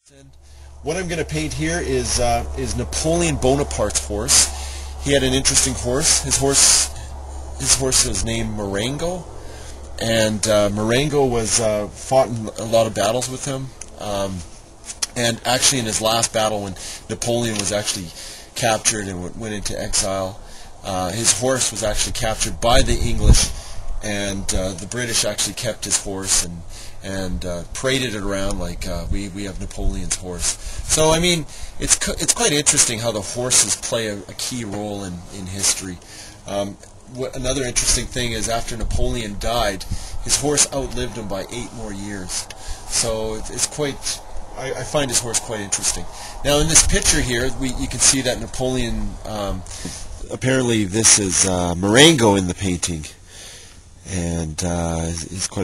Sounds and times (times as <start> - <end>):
Speech: 0.0 - 9.3, 10.0 - 53.2, 54.1 - 55.6.